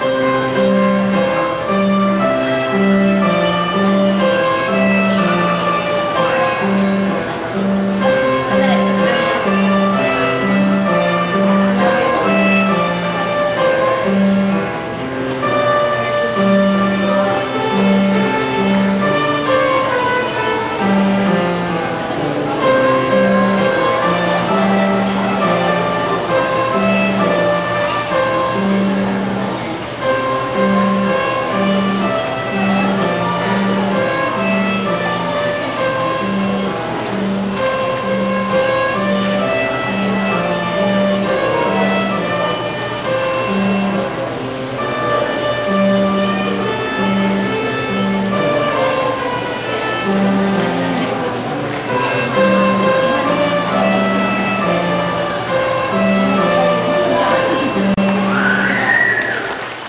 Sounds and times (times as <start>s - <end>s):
Violin, fiddle: 0.0s - 59.8s.